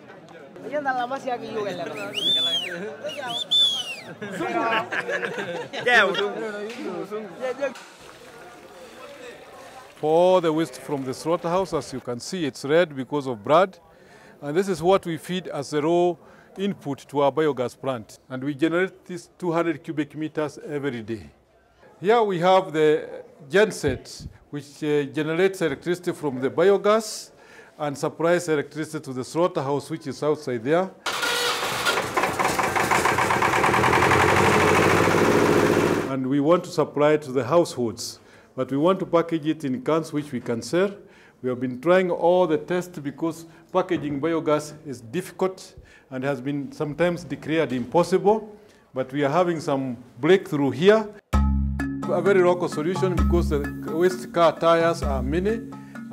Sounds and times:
Speech: 8.9 - 21.3, 22.0 - 31.0, 36.1 - 51.2, 52.1 - 55.6.

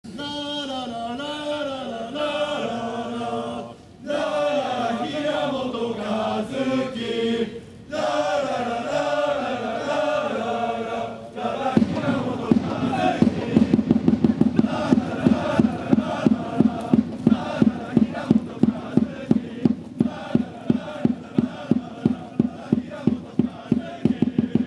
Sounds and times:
Chant: 0.1 - 24.6.

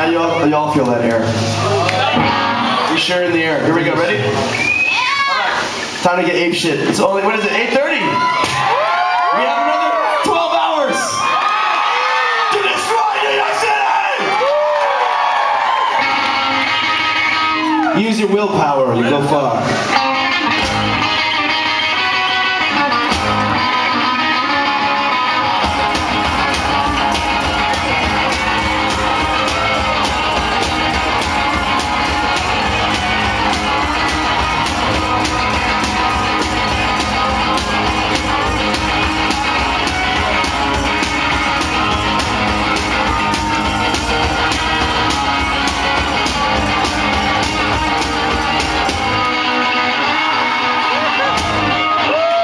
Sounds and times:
Music: 0.0 - 5.0, 15.4 - 18.6, 19.6 - 52.4.

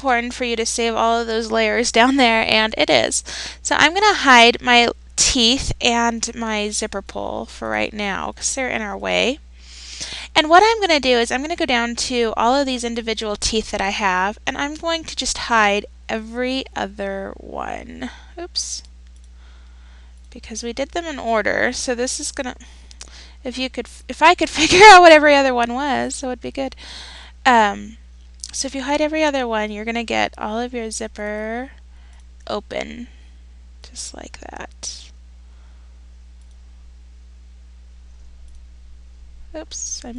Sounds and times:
Speech: 0.0 - 9.4, 10.2 - 18.9, 20.3 - 22.6, 23.4 - 26.8, 27.5 - 31.8, 32.5 - 33.1, 33.9 - 35.1, 39.6 - 40.1.

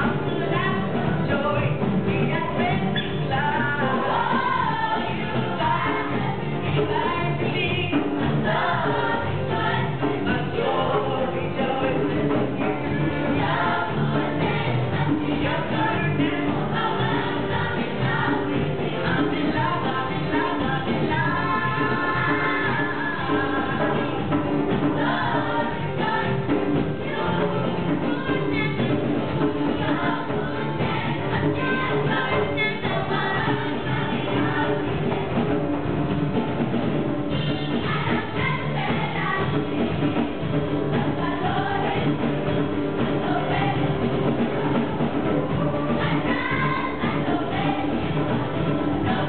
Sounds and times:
Choir: 0.0 - 35.5, 37.3 - 49.2.

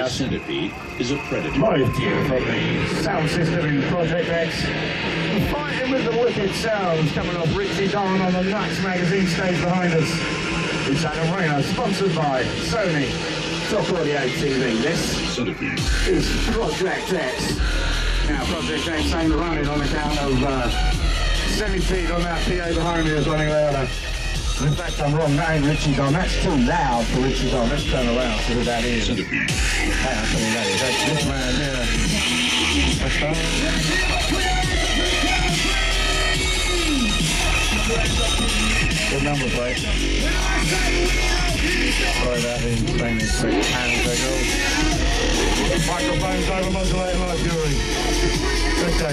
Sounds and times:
Speech: 0.0 - 4.7, 5.3 - 10.2, 10.9 - 17.6, 18.3 - 20.8, 21.5 - 23.9, 24.6 - 29.4, 30.0 - 32.0, 33.0 - 33.8, 39.1 - 39.9, 42.1 - 44.6, 45.7 - 47.8, 48.8 - 49.1
Music: 0.0 - 49.1.

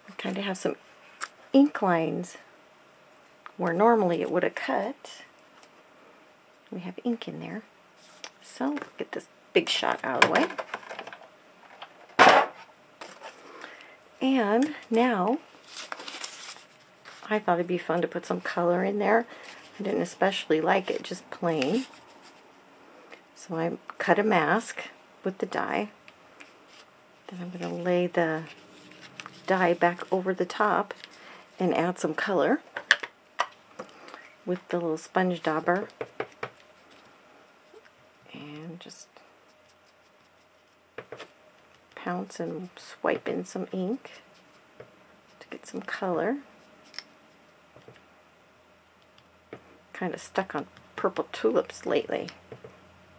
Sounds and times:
Inside, small room: 0.0 - 53.1
Speech: 0.1 - 0.8, 1.6 - 2.4, 3.6 - 5.3, 6.7 - 7.7, 8.4 - 10.5, 14.2 - 15.4, 17.2 - 21.9, 23.4 - 25.9, 27.3 - 28.6, 29.5 - 31.0, 31.6 - 32.6, 34.5 - 35.9, 38.3 - 39.2, 42.0 - 44.2, 45.4 - 46.4, 50.0 - 52.4.

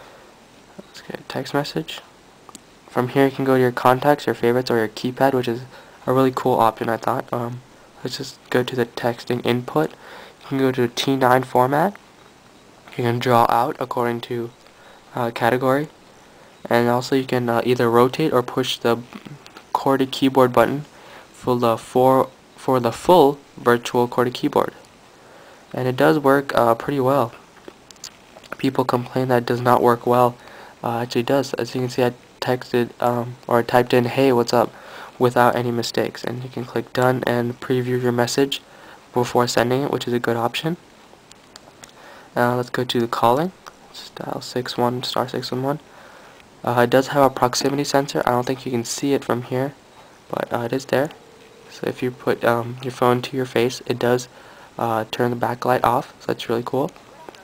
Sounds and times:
Speech: 0.8 - 2.1, 2.9 - 12.0, 12.9 - 16.0, 16.6 - 24.9, 25.7 - 27.4, 28.5 - 40.8, 42.4 - 45.9, 46.6 - 57.4.

